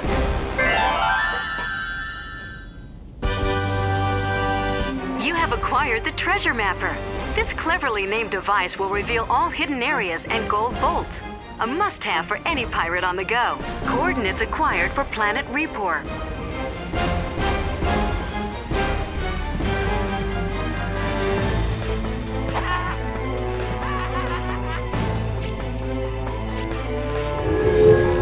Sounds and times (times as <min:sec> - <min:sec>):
Music: 0:00.0 - 0:28.2
Speech: 0:05.2 - 0:16.1.